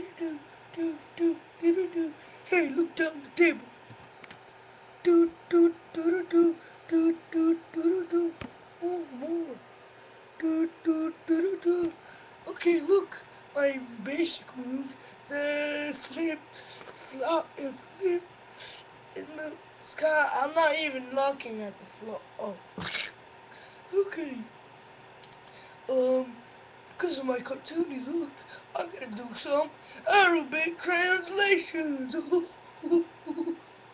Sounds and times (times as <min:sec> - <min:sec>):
Speech: 0:00.0 - 0:03.7, 0:05.0 - 0:09.6, 0:10.4 - 0:18.3, 0:19.2 - 0:23.2, 0:23.9 - 0:24.6, 0:25.9 - 0:26.4, 0:27.0 - 0:33.6.